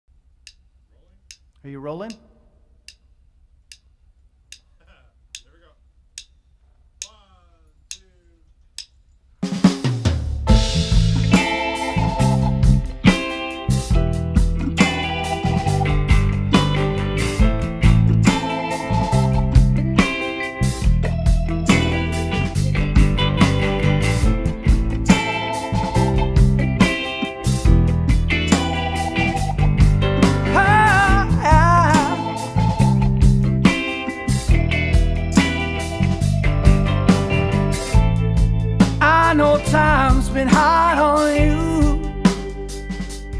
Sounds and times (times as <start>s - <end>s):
Drum: 9.4s - 43.3s
Drum kit: 9.4s - 43.3s.